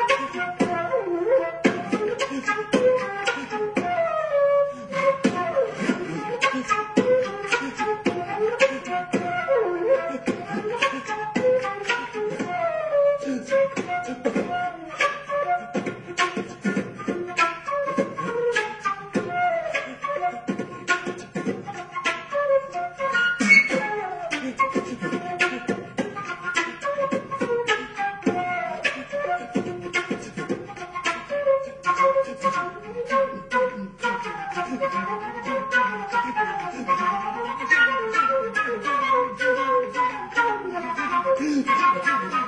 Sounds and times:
Classical music: 0.0 - 42.4
Flute: 0.0 - 42.4
Beatboxing: 1.6 - 4.0, 5.0 - 9.4, 13.2 - 22.3, 23.1 - 37.1.

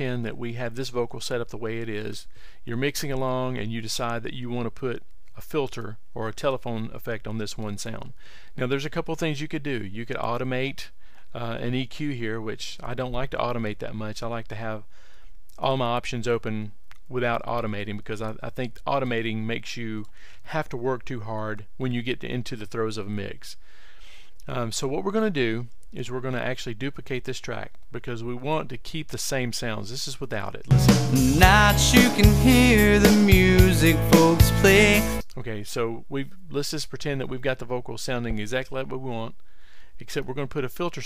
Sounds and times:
Speech: 0.0 - 14.9, 15.6 - 23.6, 24.4 - 30.7, 33.0 - 39.4, 40.0 - 41.0.

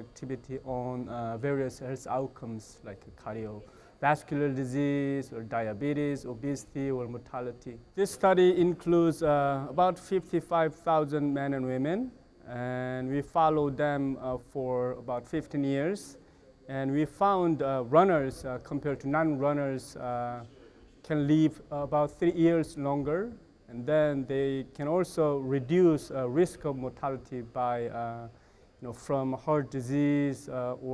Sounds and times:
Speech: 0.0 - 30.9.

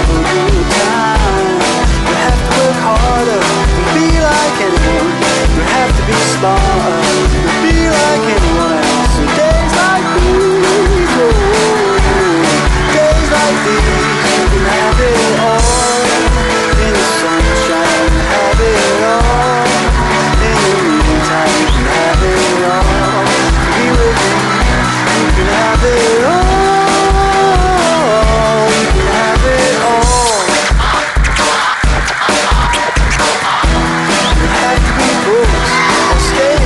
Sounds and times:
Music: 0.0 - 36.6.

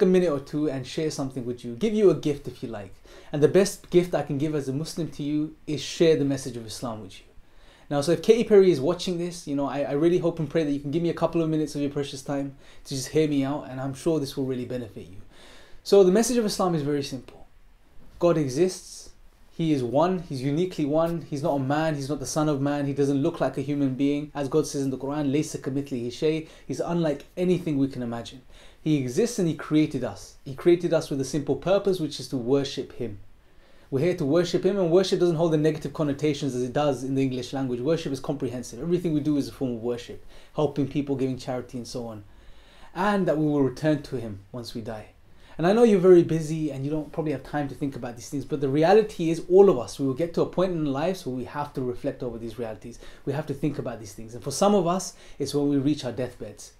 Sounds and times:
Speech: 0.0 - 7.3, 7.9 - 17.5, 18.1 - 33.2, 33.9 - 42.3, 42.9 - 56.7.

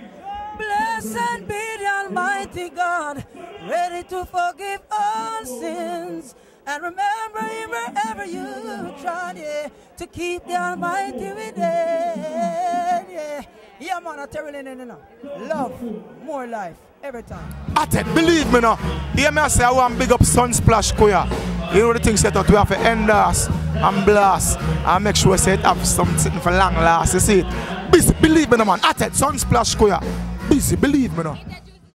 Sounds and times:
Speech: 8.7 - 31.9
Music: 17.3 - 31.9.

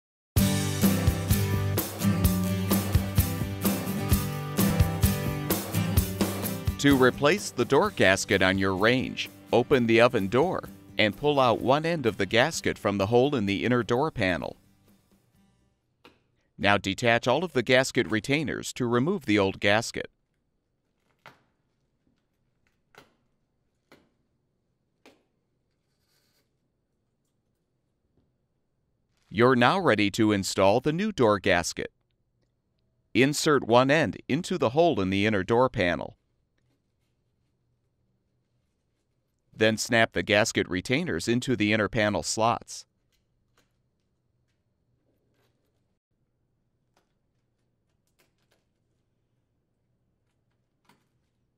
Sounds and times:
Speech: 6.8 - 14.6, 16.6 - 20.1, 29.3 - 31.9, 33.2 - 36.2, 39.6 - 42.8.

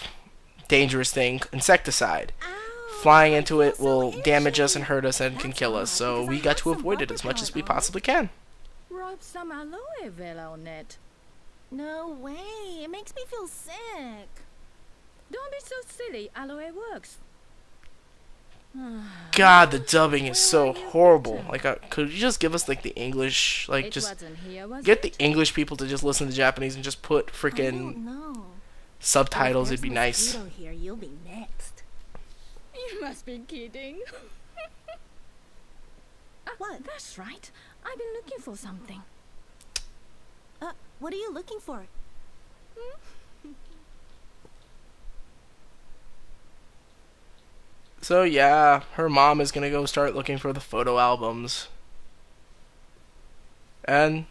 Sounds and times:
Speech: 0.7 - 8.3, 8.9 - 11.0, 11.8 - 14.4, 15.3 - 17.2, 18.8 - 31.7, 32.8 - 34.2, 36.5 - 39.1.

